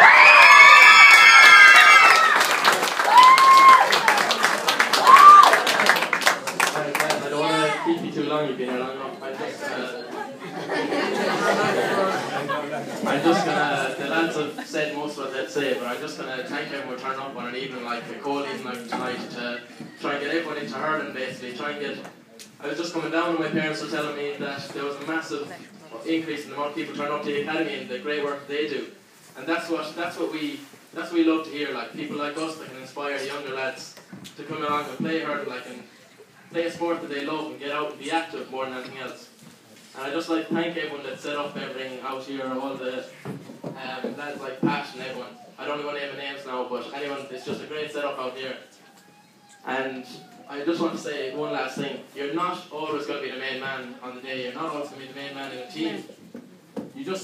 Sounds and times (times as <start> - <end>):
Male speech, man speaking: 6.6 - 10.2, 11.9 - 35.9, 36.5 - 39.3, 40.0 - 43.2, 43.8 - 48.7, 49.6 - 56.1, 57.0 - 57.2.